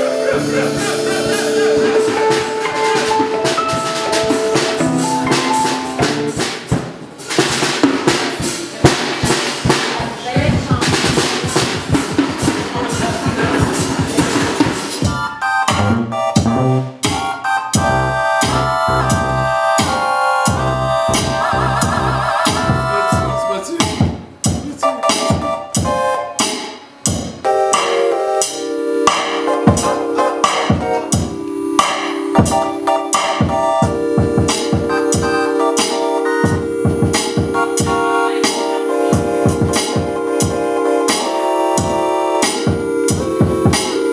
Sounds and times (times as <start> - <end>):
Percussion: 0.0 - 44.1.